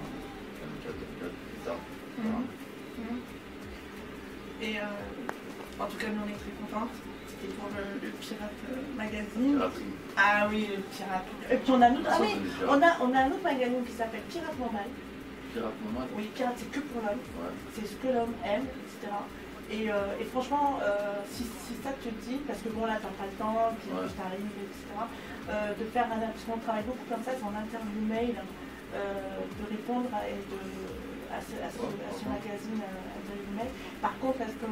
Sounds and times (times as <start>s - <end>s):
Conversation: 0.0s - 34.7s
Music: 0.0s - 34.7s.